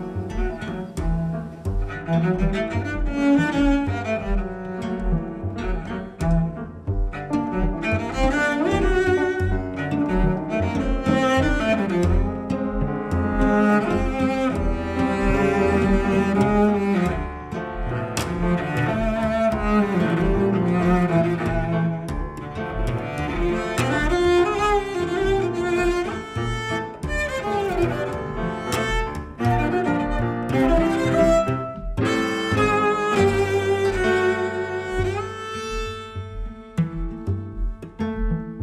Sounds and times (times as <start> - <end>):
Cello: 0.0 - 38.6
Double bass: 0.0 - 38.6.